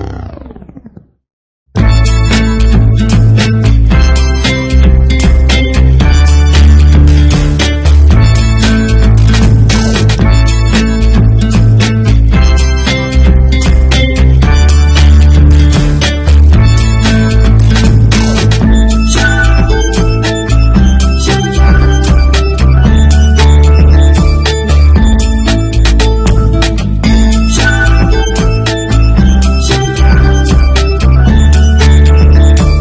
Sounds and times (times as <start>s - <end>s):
Happy music: 1.8s - 32.8s
Theme music: 1.8s - 32.8s.